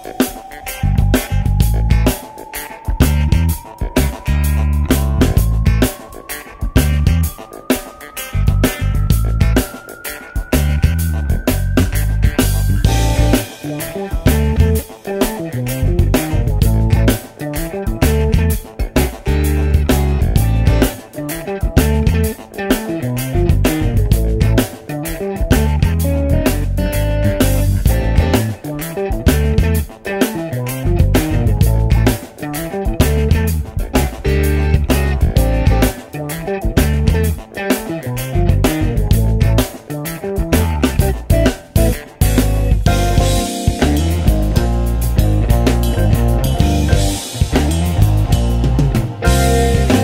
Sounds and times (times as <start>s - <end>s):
Music: 0.0s - 50.0s.